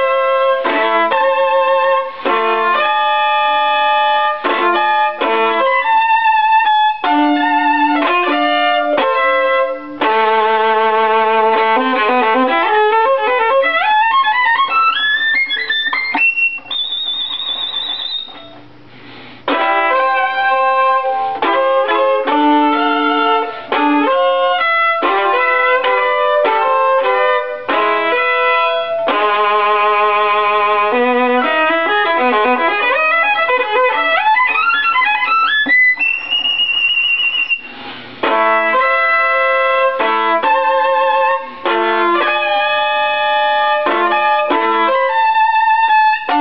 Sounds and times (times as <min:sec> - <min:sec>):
Violin, fiddle: 0:00.0 - 0:18.5, 0:19.5 - 0:46.4.